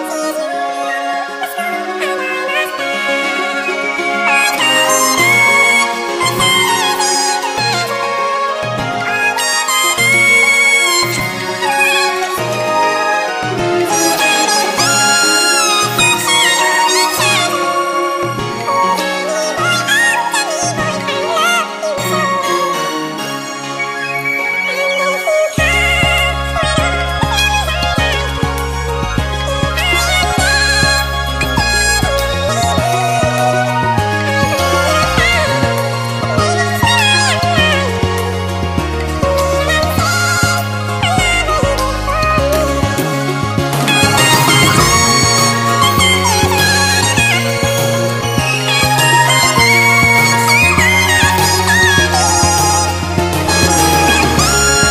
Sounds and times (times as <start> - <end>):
Music: 0.0 - 54.9.